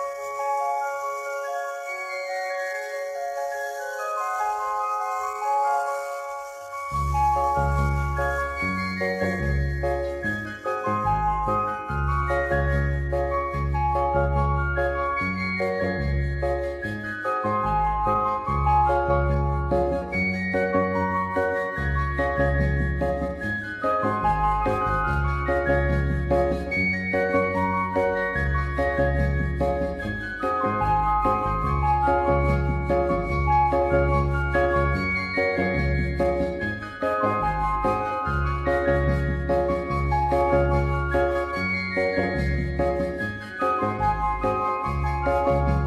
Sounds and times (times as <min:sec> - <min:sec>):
Tender music: 0:00.0 - 0:45.8.